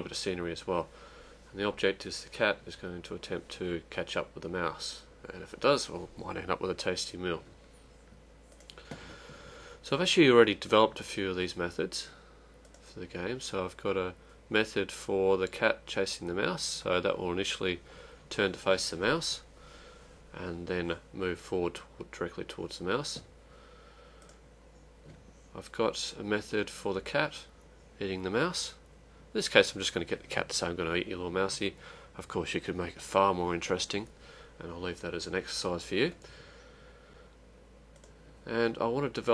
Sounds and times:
Speech: 0:00.0 - 0:00.9, 0:01.5 - 0:07.5, 0:09.8 - 0:12.2, 0:12.8 - 0:19.5, 0:20.3 - 0:23.3, 0:25.5 - 0:36.2, 0:38.4 - 0:39.3.

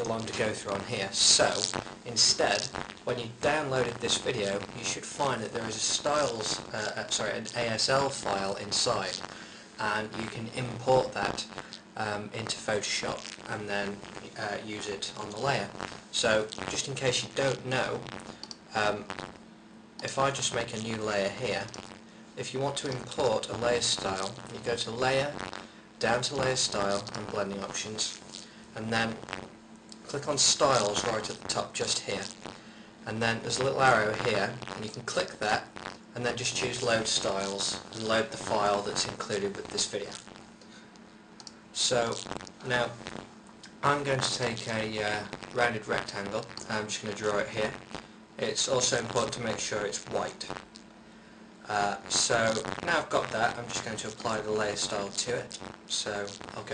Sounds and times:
Speech: 0:00.0 - 0:09.2, 0:09.8 - 0:18.1, 0:18.7 - 0:19.1, 0:20.0 - 0:21.8, 0:22.4 - 0:25.4, 0:26.0 - 0:28.2, 0:28.8 - 0:29.3, 0:30.0 - 0:32.4, 0:33.0 - 0:40.3, 0:41.8 - 0:43.0, 0:43.7 - 0:47.8, 0:48.4 - 0:50.6, 0:51.6 - 0:56.7.

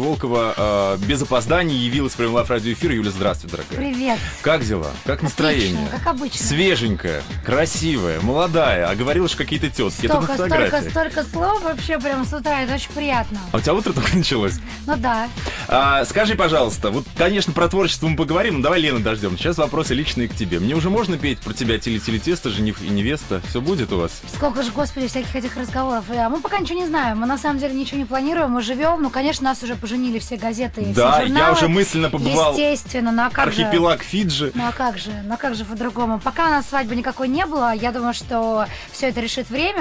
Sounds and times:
Music: 0:00.0 - 0:39.8
Speech: 0:00.0 - 0:39.8.

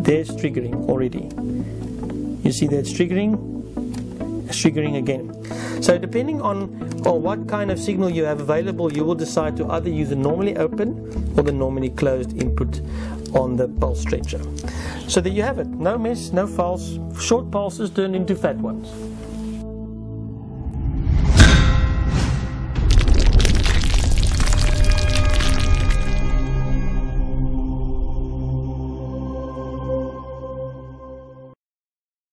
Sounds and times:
Music: 0:00.0 - 0:31.6
Breaking: 0:22.8 - 0:26.4.

